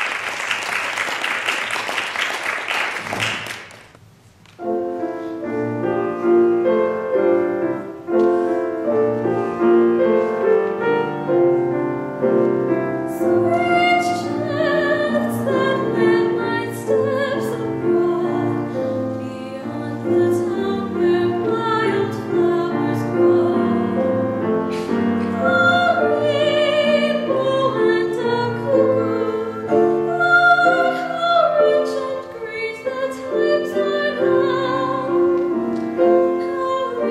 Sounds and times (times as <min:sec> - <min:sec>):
Music: 0:04.4 - 0:37.1
Female singing: 0:13.1 - 0:18.6, 0:19.2 - 0:24.0, 0:25.4 - 0:35.4, 0:36.3 - 0:37.1.